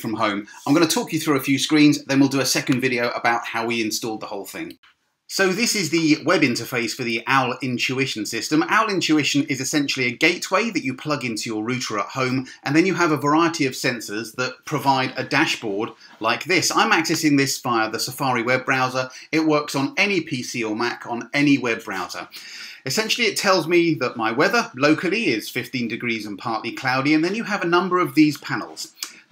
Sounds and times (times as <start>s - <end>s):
Speech: 0.0s - 29.3s.